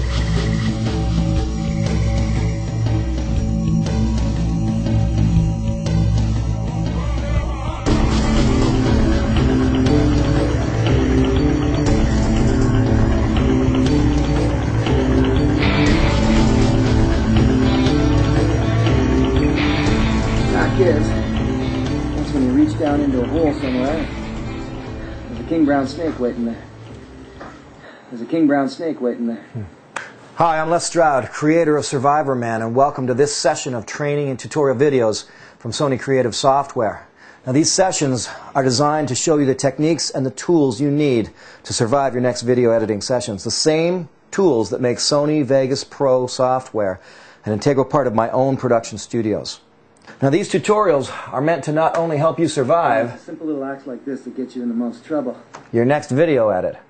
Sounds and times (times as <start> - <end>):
Speech: 22.3 - 24.1, 25.4 - 26.6, 28.1 - 29.7, 30.4 - 49.6, 50.2 - 56.8.